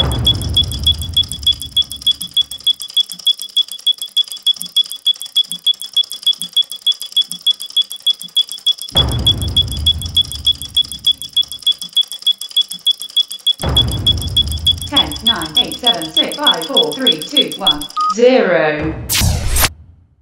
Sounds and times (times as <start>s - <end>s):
Sound effect: 8.4s - 12.0s, 19.0s - 20.2s.